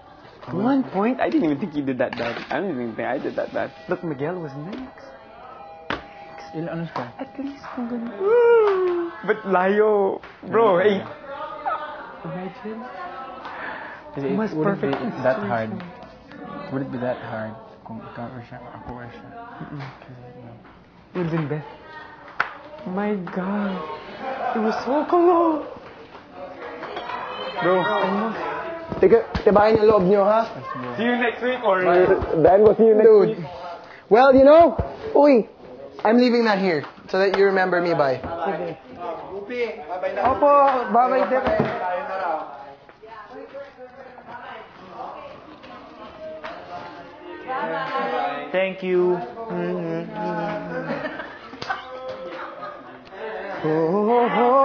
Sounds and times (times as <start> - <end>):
Inside, large room or hall: 0.0 - 54.6.